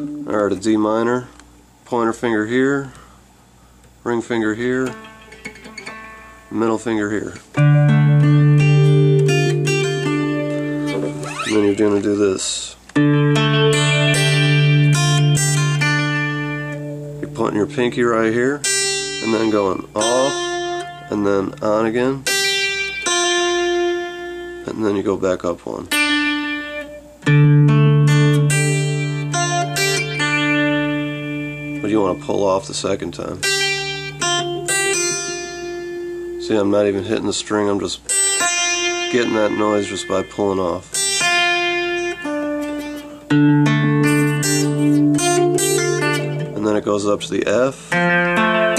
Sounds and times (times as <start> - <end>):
Speech: 0.3 - 3.0, 4.0 - 5.0, 6.5 - 7.5, 11.4 - 12.8, 17.2 - 20.4, 21.1 - 22.3, 24.6 - 25.9, 31.8 - 33.4, 36.4 - 38.0, 39.1 - 40.9, 46.6 - 47.8
Strum: 4.2 - 25.0, 25.9 - 48.7
Acoustic guitar: 4.7 - 12.2, 12.9 - 48.7.